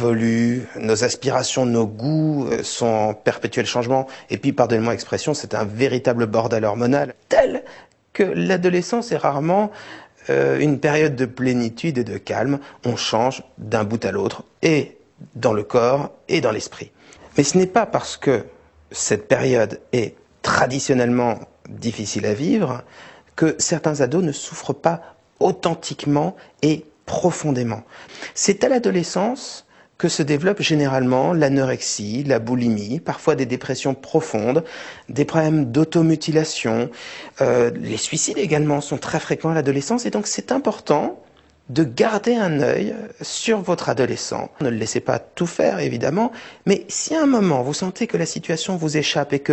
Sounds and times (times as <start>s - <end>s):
Speech: 0.0s - 49.5s.